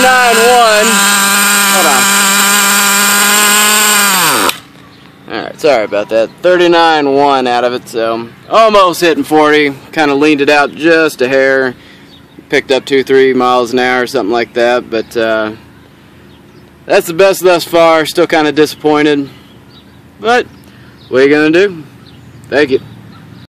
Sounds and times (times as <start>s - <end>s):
Speech: 5.3s - 11.8s, 12.5s - 15.6s, 16.9s - 19.3s, 20.2s - 20.5s, 21.1s - 21.9s, 22.5s - 22.9s.